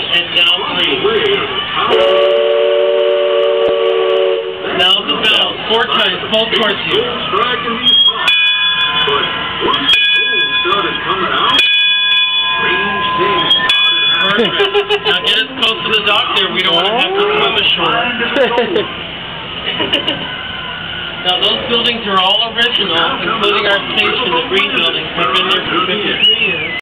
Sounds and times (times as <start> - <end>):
Speech: 21.2 - 26.8.